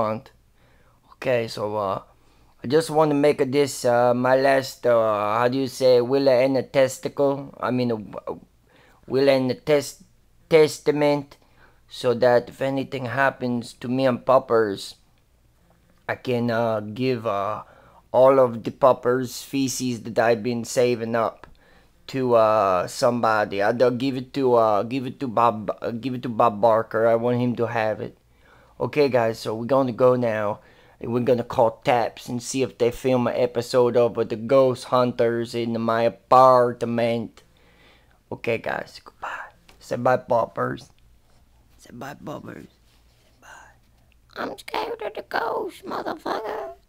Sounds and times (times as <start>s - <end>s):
Whispering: 39.1s - 39.6s, 43.4s - 43.8s.